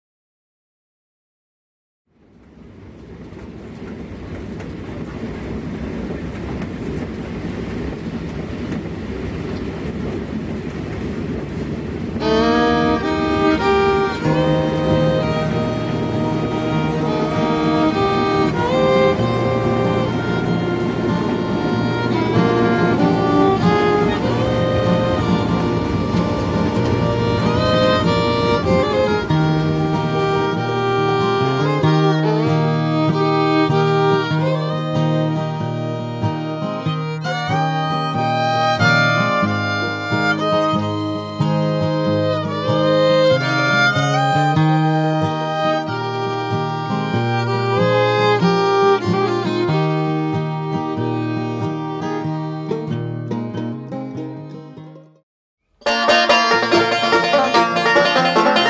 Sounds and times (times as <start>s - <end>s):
Music: 12.2s - 55.2s, 55.8s - 58.6s.